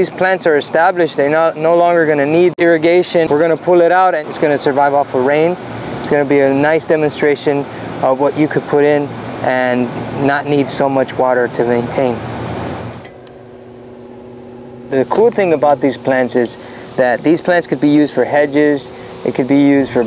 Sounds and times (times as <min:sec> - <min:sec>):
Speech: 0:00.0 - 0:12.2, 0:14.9 - 0:20.0
Outside, urban or manmade: 0:00.0 - 0:20.0.